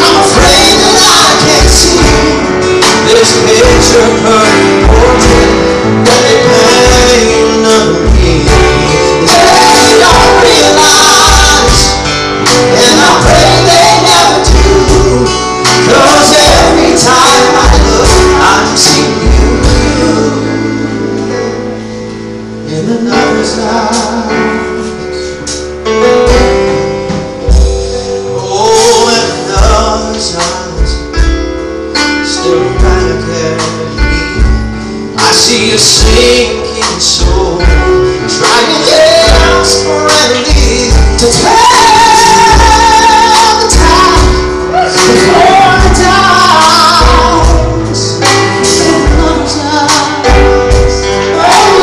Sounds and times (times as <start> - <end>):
Inside, large room or hall: 0.0 - 51.8
Music: 0.0 - 51.8.